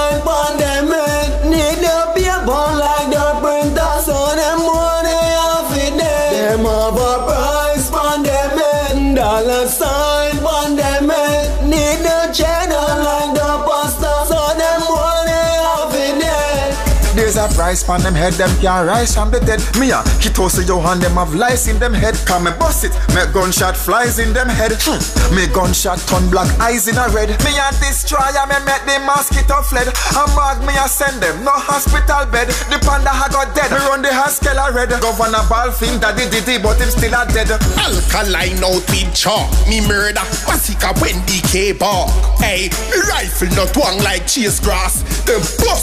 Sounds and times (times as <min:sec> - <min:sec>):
Music: 0:00.0 - 0:45.8.